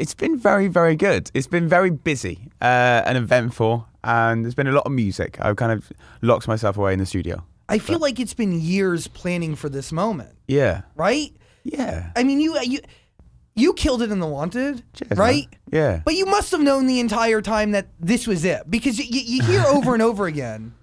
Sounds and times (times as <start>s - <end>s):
Speech: 0.0s - 12.8s, 13.6s - 20.7s.